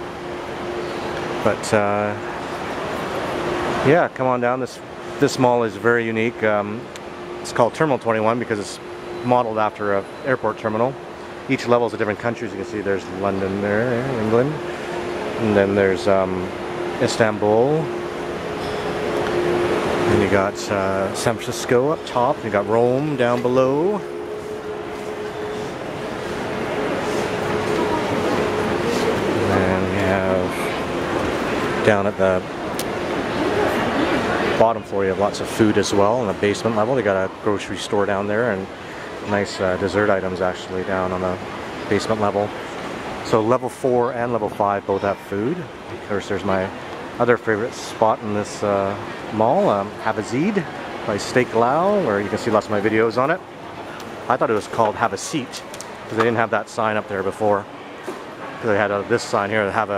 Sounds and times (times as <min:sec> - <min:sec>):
Speech: 0:01.4 - 0:02.3, 0:03.8 - 0:14.7, 0:15.3 - 0:18.0, 0:19.9 - 0:24.1, 0:27.2 - 0:30.9, 0:31.7 - 0:32.5, 0:33.4 - 0:42.6, 0:43.2 - 0:57.7, 0:58.6 - 0:59.9.